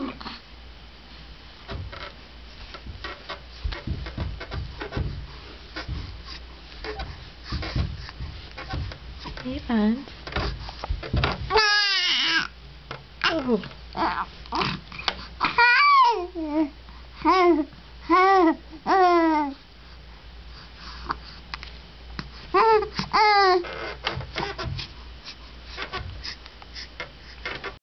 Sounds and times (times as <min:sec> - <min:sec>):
Inside, small room: 0:00.0 - 0:27.8.